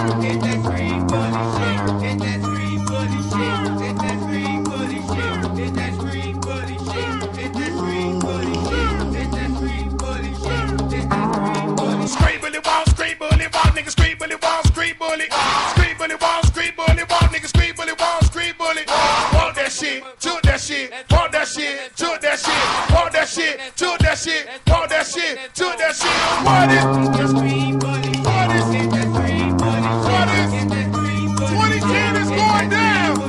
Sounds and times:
Music: 0:00.0 - 0:21.5, 0:22.4 - 0:25.0, 0:26.0 - 0:33.2.

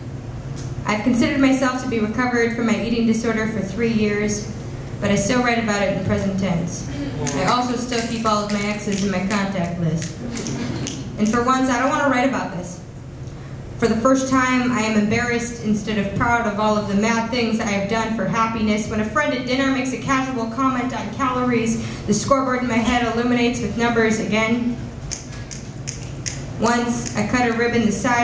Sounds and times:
Speech: 0:00.9 - 0:10.1, 0:11.2 - 0:12.8, 0:13.8 - 0:24.8, 0:26.6 - 0:28.2.

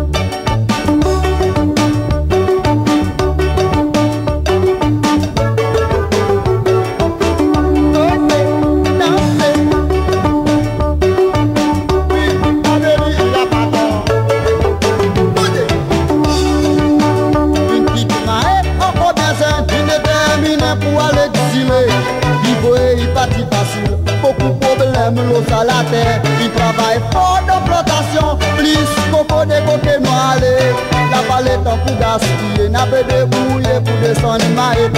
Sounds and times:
Dance music: 0:00.0 - 0:34.9
Independent music: 0:00.0 - 0:34.9
Rhythm and blues: 0:00.0 - 0:34.9.

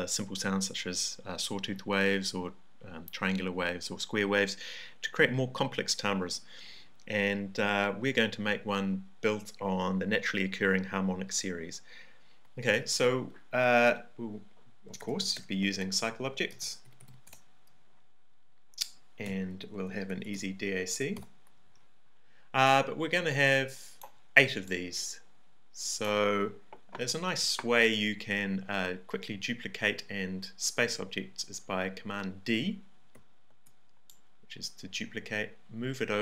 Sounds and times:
Speech: 0:00.0 - 0:06.4, 0:07.1 - 0:11.9, 0:12.6 - 0:16.8, 0:19.2 - 0:21.2, 0:22.6 - 0:25.2, 0:25.8 - 0:32.9, 0:34.5 - 0:36.2.

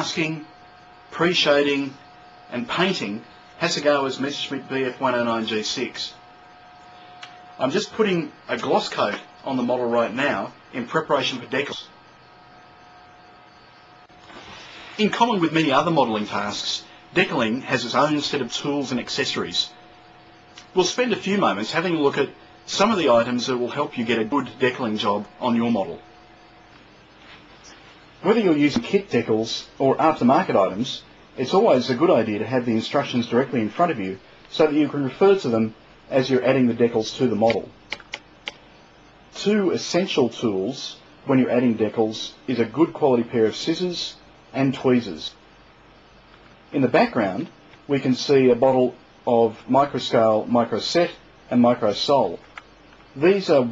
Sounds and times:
Speech: 0:00.0 - 0:06.2, 0:07.6 - 0:12.0, 0:15.0 - 0:19.8, 0:20.6 - 0:26.1, 0:28.2 - 0:37.8, 0:39.3 - 0:45.4, 0:46.7 - 0:52.5, 0:53.2 - 0:53.7.

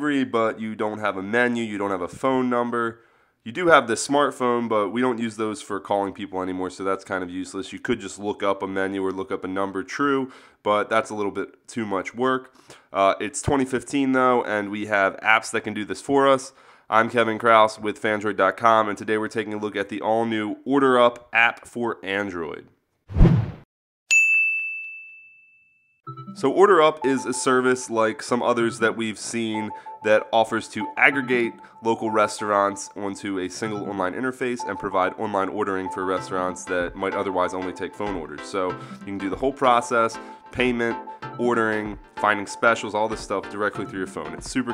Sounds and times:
Speech: 0:00.0 - 0:22.8, 0:26.4 - 0:44.7.

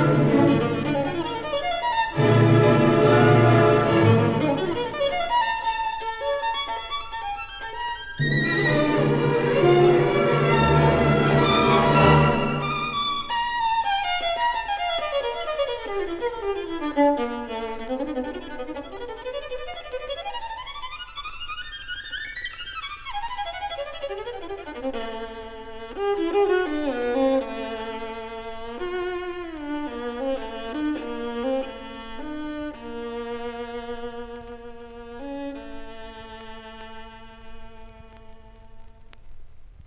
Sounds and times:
Violin, fiddle: 0:00.0 - 0:39.1.

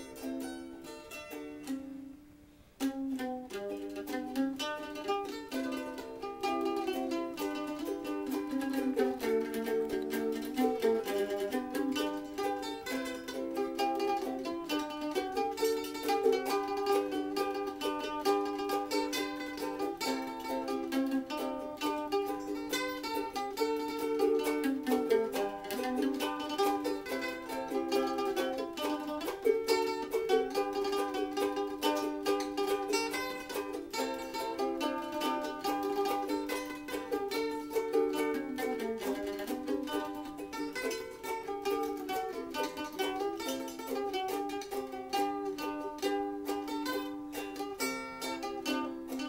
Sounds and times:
Ukulele: 0:00.0 - 0:49.2.

